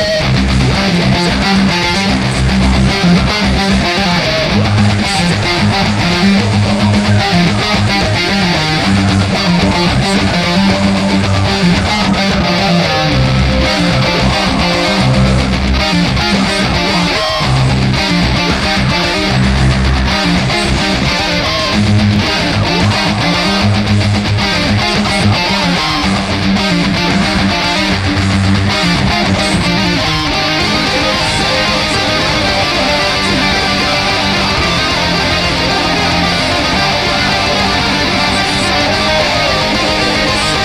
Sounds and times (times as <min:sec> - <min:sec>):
Guitar: 0:00.0 - 0:40.6.